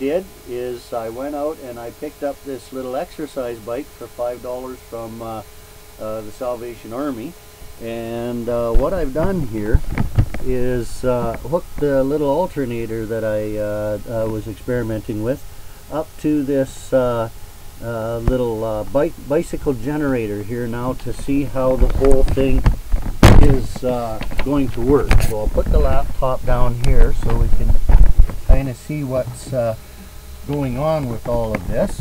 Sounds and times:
Speech: 0.0s - 9.8s, 10.4s - 22.7s, 23.3s - 27.8s, 28.5s - 29.8s, 30.5s - 32.0s.

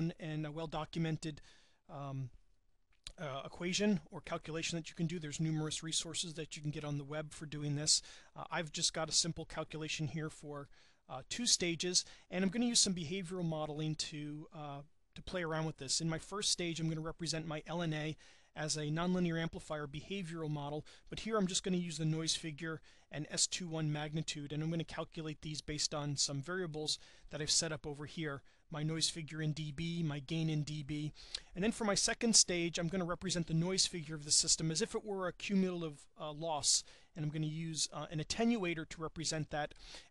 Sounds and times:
Speech: 0.0s - 2.4s, 3.1s - 39.8s.

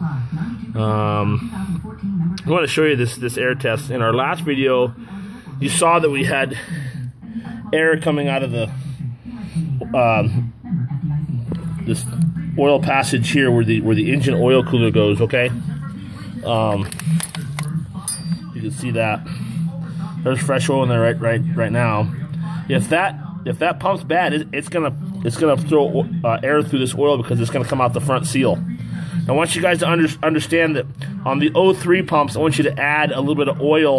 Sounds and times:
Speech: 0.0s - 17.0s, 17.7s - 33.9s.

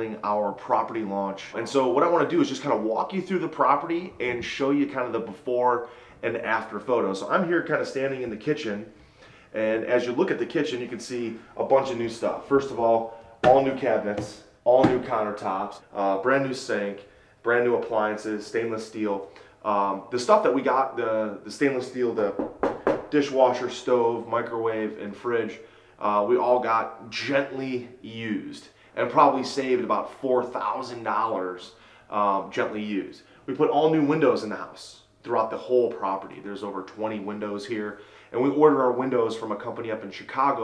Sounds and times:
Speech: 0.0s - 8.9s, 9.5s - 22.4s, 23.1s - 40.6s.

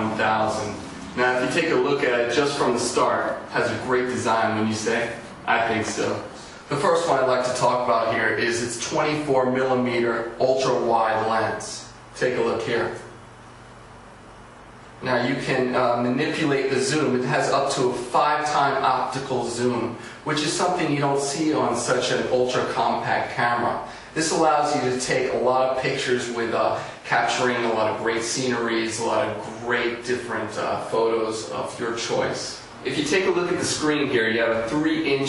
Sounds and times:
Speech: 0.0s - 13.2s, 15.0s - 35.2s.

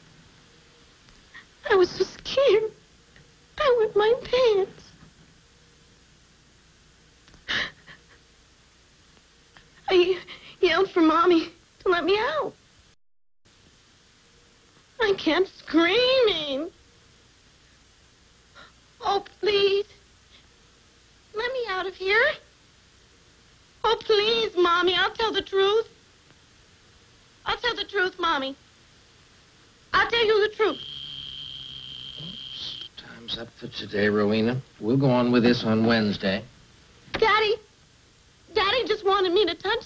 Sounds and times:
Inside, small room: 0.0s - 39.8s
Speech: 1.6s - 2.8s, 3.6s - 4.8s, 9.9s - 12.6s, 15.0s - 16.7s, 21.4s - 22.5s, 23.8s - 25.9s, 27.5s - 28.6s, 30.0s - 30.8s, 38.5s - 39.8s.

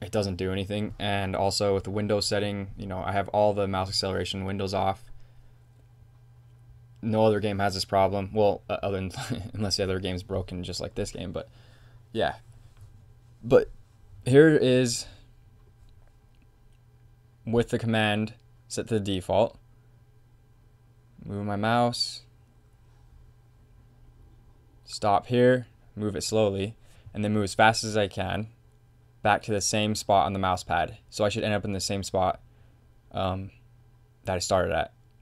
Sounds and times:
Speech: 0.0s - 5.0s, 7.0s - 11.5s, 12.2s - 12.4s, 13.4s - 15.2s, 17.4s - 19.6s, 21.2s - 22.3s, 24.9s - 28.6s, 29.2s - 32.4s, 33.1s - 33.6s, 34.2s - 35.0s.

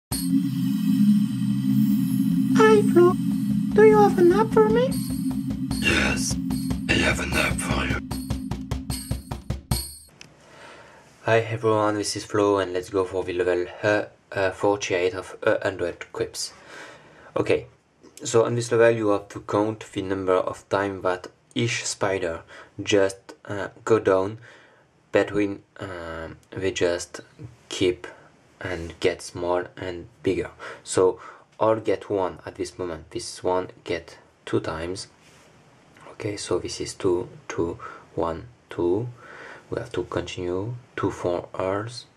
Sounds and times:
Music: 0.1s - 10.2s
Speech: 2.6s - 3.2s, 3.8s - 5.0s, 5.8s - 8.0s, 11.2s - 16.6s, 17.4s - 24.4s, 25.1s - 35.1s, 36.0s - 42.1s.

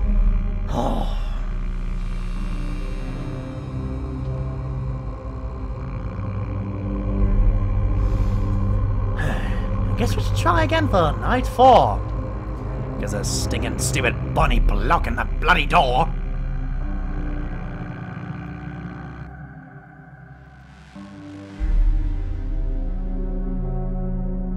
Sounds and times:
Music: 0.0s - 24.5s
Speech: 10.0s - 12.0s, 13.0s - 16.2s.

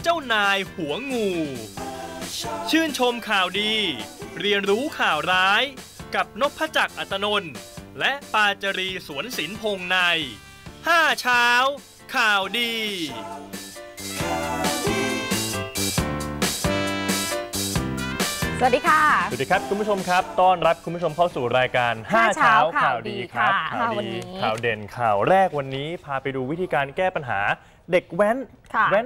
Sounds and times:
Music: 0.0s - 27.0s
Speech: 10.9s - 13.1s, 19.0s - 29.0s.

